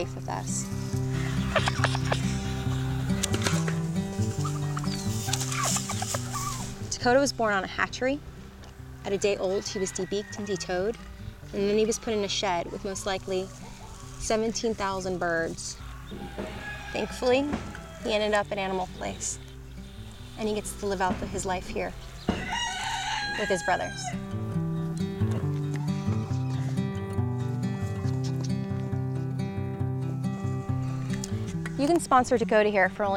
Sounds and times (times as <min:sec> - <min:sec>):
Turkey: 0:04.4 - 0:06.7
Crowing, cock-a-doodle-doo: 0:09.2 - 0:10.9, 0:15.9 - 0:18.1, 0:22.1 - 0:24.2.